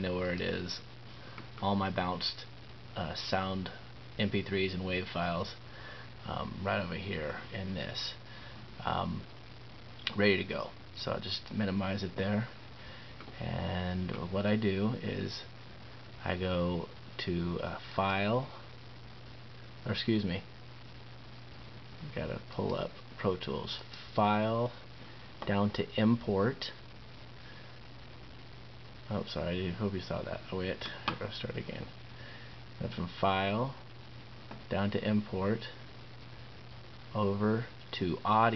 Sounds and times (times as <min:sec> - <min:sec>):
Speech: 0:00.0 - 0:00.9, 0:01.6 - 0:05.6, 0:06.2 - 0:08.2, 0:08.8 - 0:09.3, 0:10.1 - 0:12.6, 0:13.4 - 0:15.5, 0:16.2 - 0:18.6, 0:19.8 - 0:20.5, 0:22.0 - 0:24.8, 0:25.4 - 0:26.8, 0:29.1 - 0:32.0, 0:32.8 - 0:33.8, 0:34.7 - 0:35.8, 0:37.1 - 0:38.5.